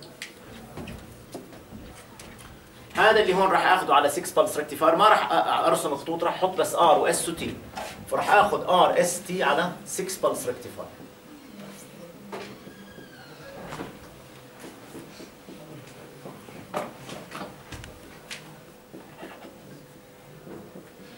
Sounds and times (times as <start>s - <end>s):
Speech: 2.9s - 11.0s.